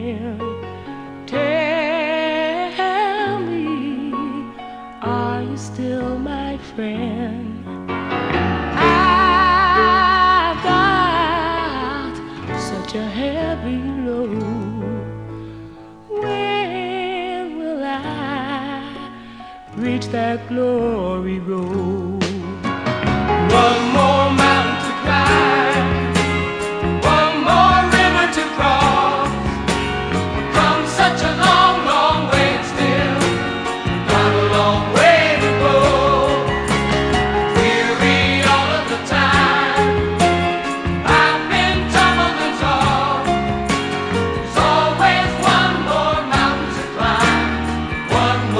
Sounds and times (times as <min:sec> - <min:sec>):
Music: 0:00.0 - 0:48.5.